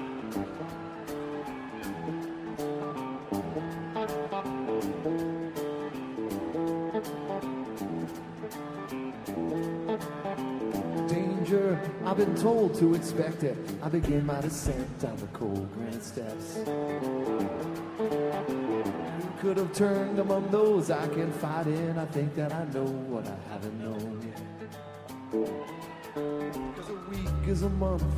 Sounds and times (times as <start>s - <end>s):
Music: 0.0s - 28.1s.